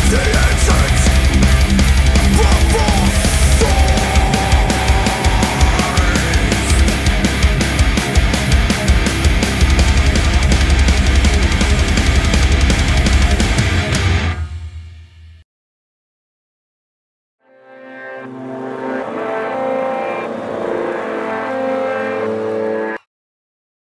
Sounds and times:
Heavy metal: 0:00.0 - 0:15.3, 0:17.9 - 0:23.0.

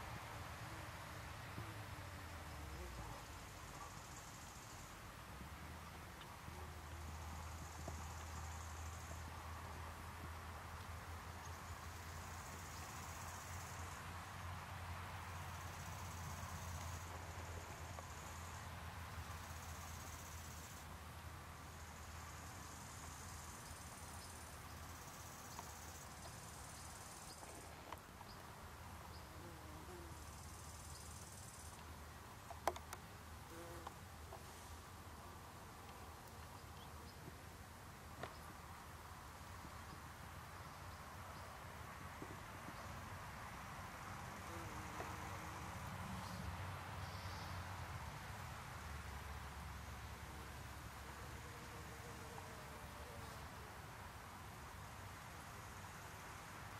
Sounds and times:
Cricket: 0:00.5 - 0:05.0, 0:06.6 - 0:09.8, 0:10.9 - 0:14.6, 0:15.2 - 0:20.9, 0:21.6 - 0:28.4, 0:29.0 - 0:34.7, 0:38.1 - 0:56.7.

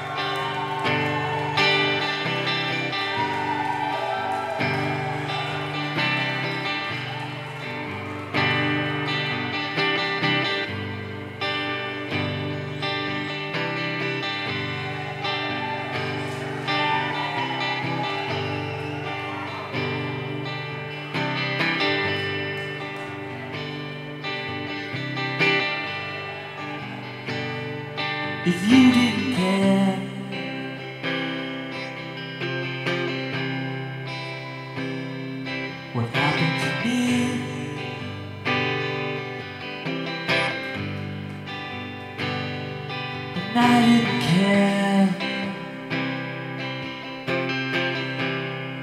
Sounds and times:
Music: 0:00.0 - 0:48.8.

